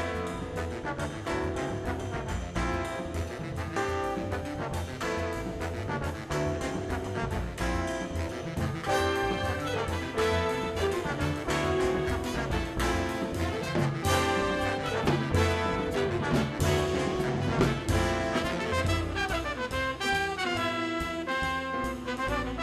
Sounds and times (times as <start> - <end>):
Independent music: 0.0 - 22.6
Orchestra: 0.0 - 22.6.